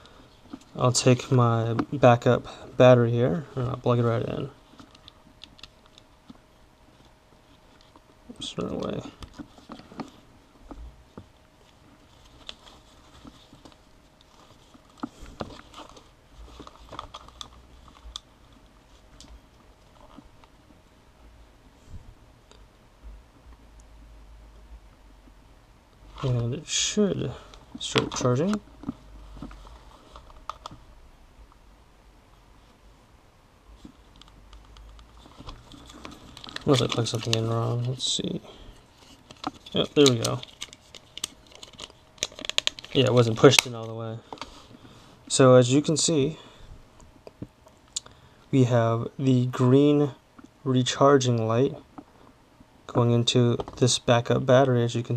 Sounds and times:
Speech: 0.8s - 4.6s, 8.3s - 9.2s, 26.2s - 28.6s, 36.6s - 38.6s, 39.7s - 40.4s, 43.0s - 44.2s, 45.3s - 46.4s, 48.6s - 51.8s, 52.9s - 55.1s.

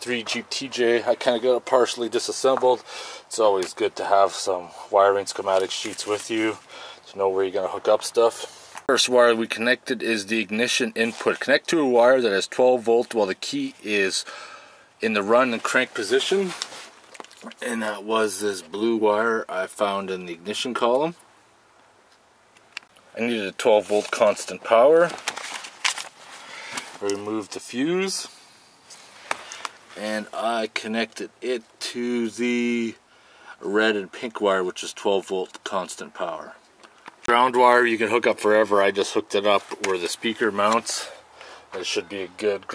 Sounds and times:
Speech: 0.0s - 14.3s, 15.0s - 16.6s, 17.4s - 21.2s, 23.1s - 25.2s, 27.0s - 28.4s, 30.0s - 33.0s, 33.6s - 36.6s, 37.3s - 42.7s.

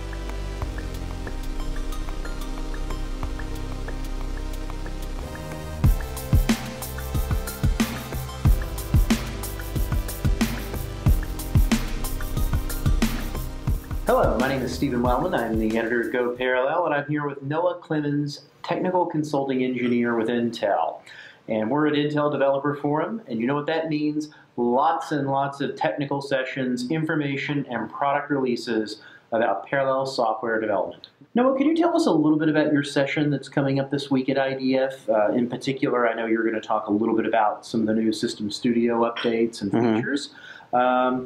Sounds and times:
Speech: 14.1s - 41.2s.

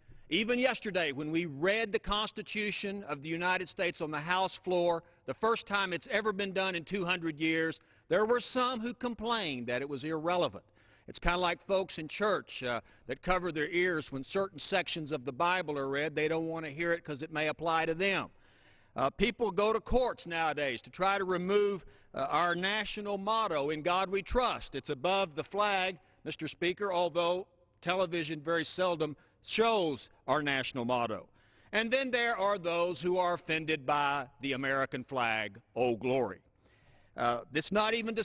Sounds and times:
Narration, monologue: 0.0s - 38.2s
Male speech, man speaking: 0.3s - 18.3s, 19.0s - 36.4s, 37.2s - 38.2s.

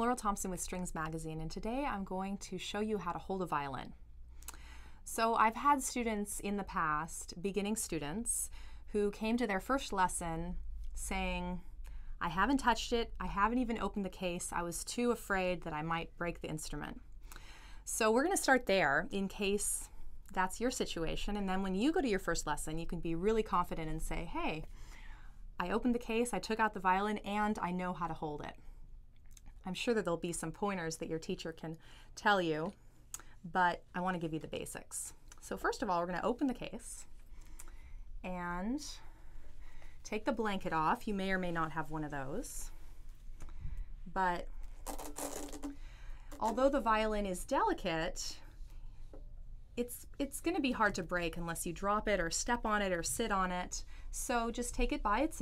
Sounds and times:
Speech: 0.0s - 4.0s, 5.1s - 17.0s, 17.9s - 24.7s, 25.6s - 28.6s, 29.6s - 32.8s, 33.5s - 37.1s, 38.3s - 39.1s, 40.1s - 42.7s, 44.2s - 44.5s, 46.4s - 48.5s, 49.8s - 55.4s.

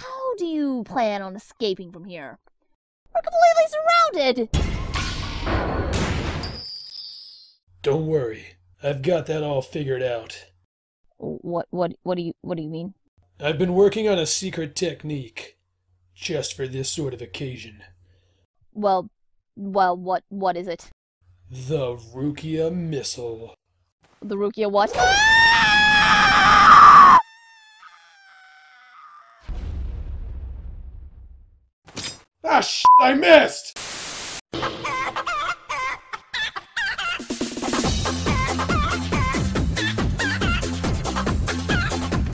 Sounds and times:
Speech: 7.8s - 10.5s, 11.2s - 15.6s, 21.5s - 23.6s, 24.2s - 25.0s, 32.5s - 33.7s.

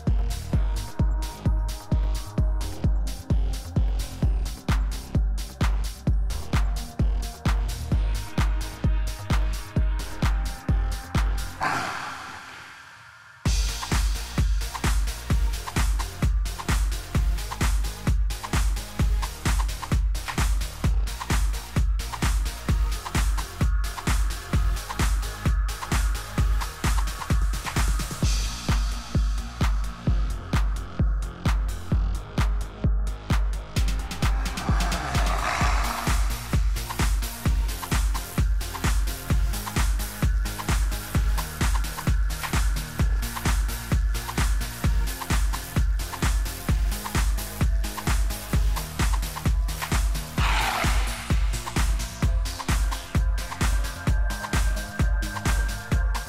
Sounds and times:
Disco: 13.5s - 56.2s.

